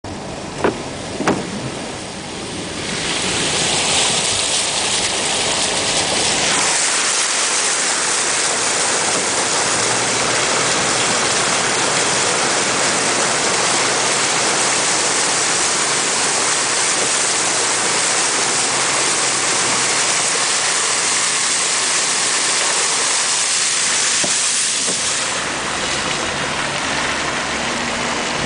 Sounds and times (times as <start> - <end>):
Car: 0.0 - 28.4
Rain: 0.1 - 28.4.